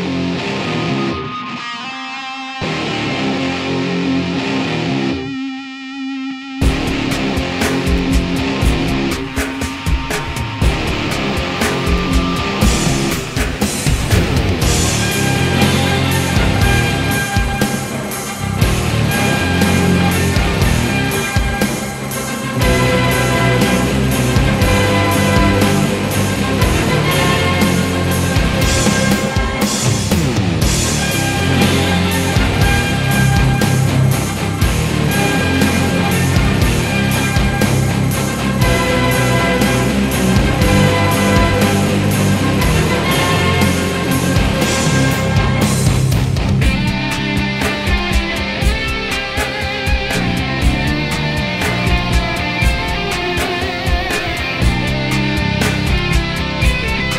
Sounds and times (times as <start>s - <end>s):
Music: 0.0s - 57.1s.